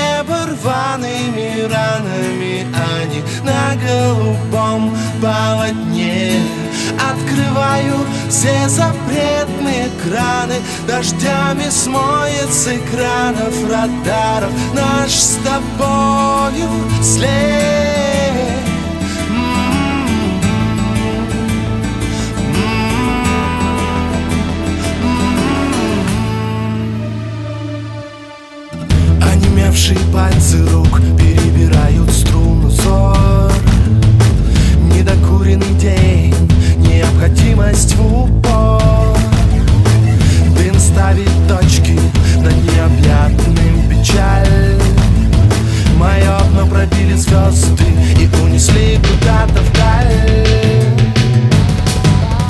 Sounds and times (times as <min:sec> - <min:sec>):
Music: 0:00.0 - 0:52.4.